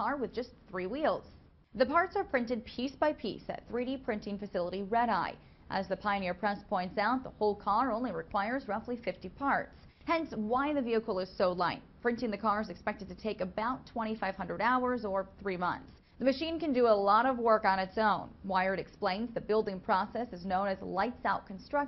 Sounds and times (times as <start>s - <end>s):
Speech: 0.0s - 21.8s.